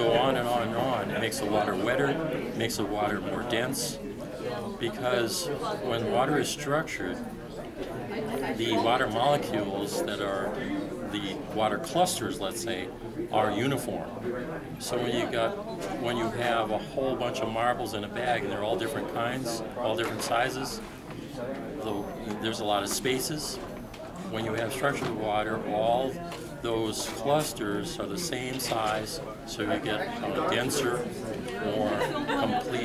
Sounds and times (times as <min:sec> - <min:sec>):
Speech: 0:00.0 - 0:32.8.